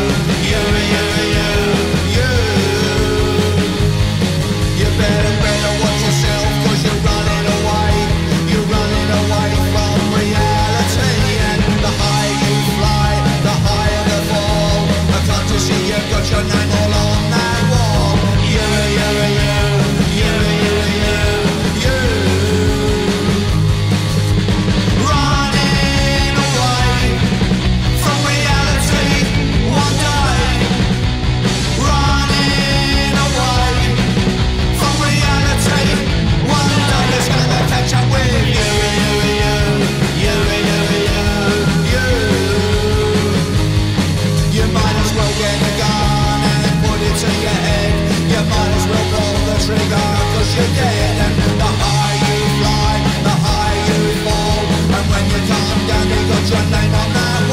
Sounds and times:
Punk rock: 0.0 - 57.5.

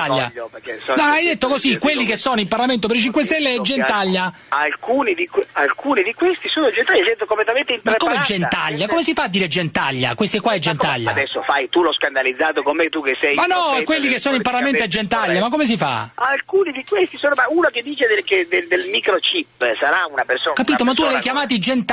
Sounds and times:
Radio: 0.0 - 9.0, 10.7 - 15.5, 16.2 - 21.6
Speech: 0.0 - 21.9.

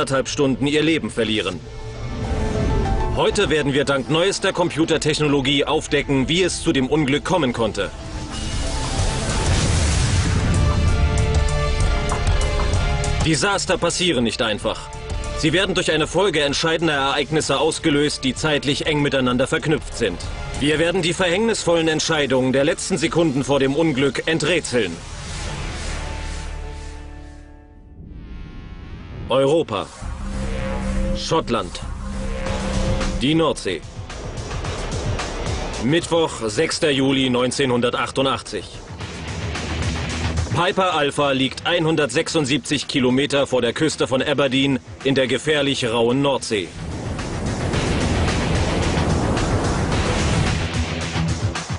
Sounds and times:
Speech: 0.0 - 1.6, 3.2 - 7.9, 13.2 - 25.0, 29.3 - 30.0, 31.2 - 31.9, 33.2 - 33.9, 35.8 - 38.8, 40.5 - 46.8
Music: 0.0 - 51.7
Explosion: 1.7 - 3.6, 8.1 - 13.3, 27.8 - 36.1, 46.8 - 51.0.

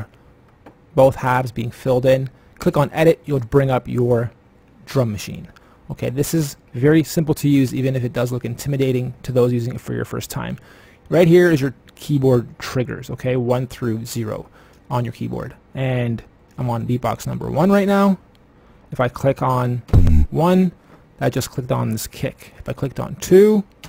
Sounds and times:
Speech: 1.0 - 18.2, 18.9 - 23.8.

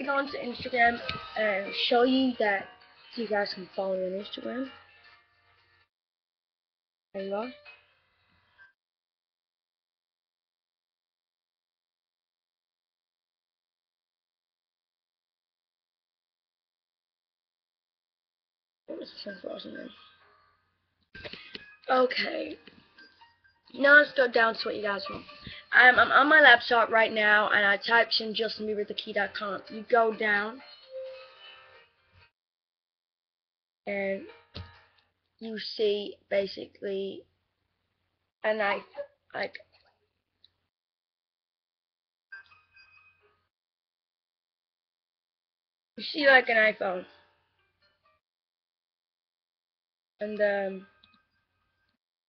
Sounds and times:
Speech: 0.0 - 4.7, 7.2 - 7.6, 18.9 - 20.0, 21.9 - 22.6, 23.8 - 30.6, 33.9 - 34.3, 35.4 - 37.2, 38.5 - 39.6, 46.0 - 47.1, 50.2 - 50.8
Music: 0.0 - 5.9, 7.2 - 8.8, 18.9 - 32.4, 33.9 - 37.3, 38.4 - 40.6, 42.3 - 43.5, 46.0 - 48.2, 50.2 - 52.0.

